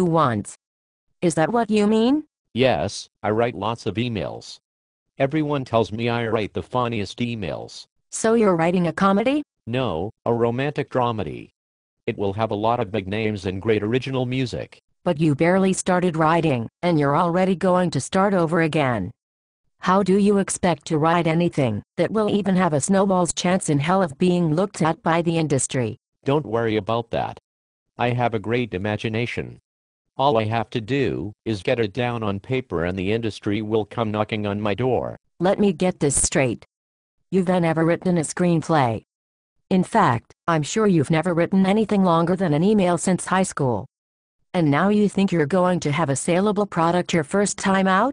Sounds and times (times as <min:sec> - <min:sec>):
Speech: 0:00.0 - 0:00.6, 0:01.2 - 0:04.6, 0:05.2 - 0:11.5, 0:12.1 - 0:19.1, 0:19.8 - 0:27.4, 0:28.0 - 0:29.6, 0:30.2 - 0:36.7, 0:37.4 - 0:39.0, 0:39.7 - 0:43.9, 0:44.6 - 0:48.1.